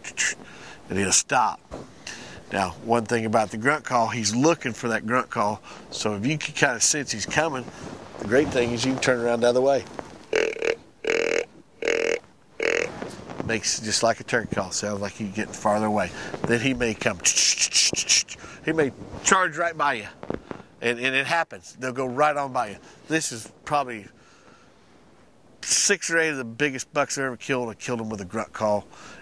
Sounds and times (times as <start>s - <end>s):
Speech: 0.0s - 1.6s, 2.5s - 9.9s, 13.4s - 20.2s, 20.8s - 24.1s, 25.6s - 28.9s.